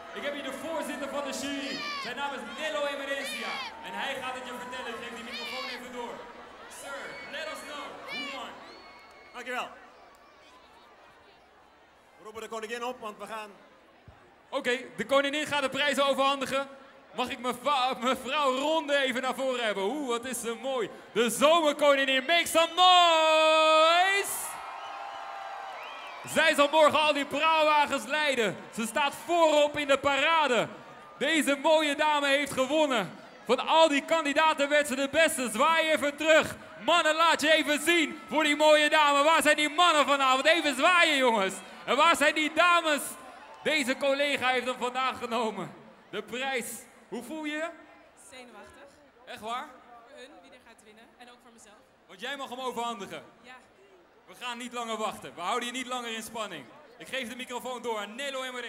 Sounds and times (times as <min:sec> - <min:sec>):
Speech: 0:00.2 - 0:08.5, 0:26.3 - 0:47.8.